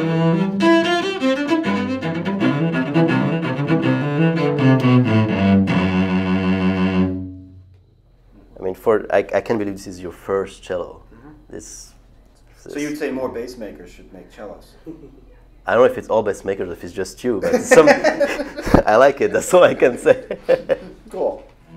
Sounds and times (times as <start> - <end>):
Music: 0.0 - 7.8.